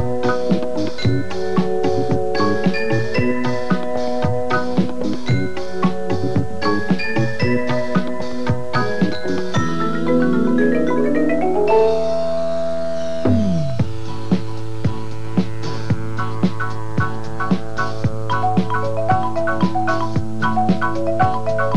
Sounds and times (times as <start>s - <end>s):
Marimba, xylophone: 0.0s - 14.2s, 18.3s - 21.7s.